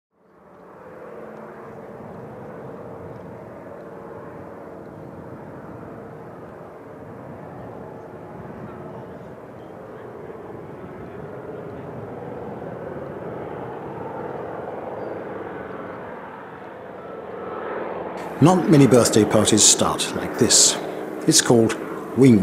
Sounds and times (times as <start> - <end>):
Vehicle: 0.2 - 22.4.